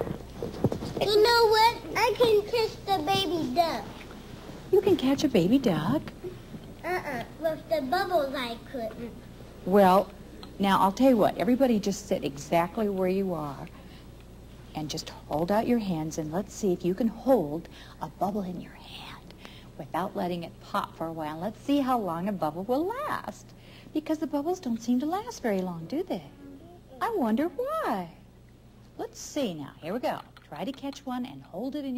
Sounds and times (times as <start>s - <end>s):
Inside, small room: 0.0s - 31.9s.